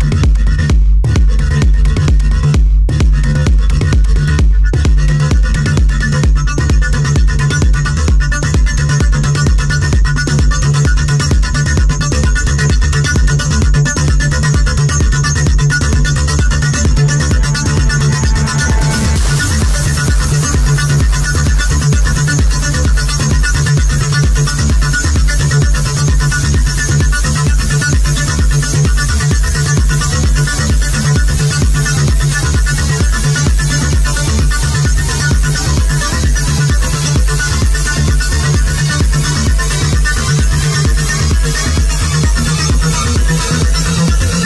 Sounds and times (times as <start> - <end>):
Electronic dance music: 0.0 - 44.4.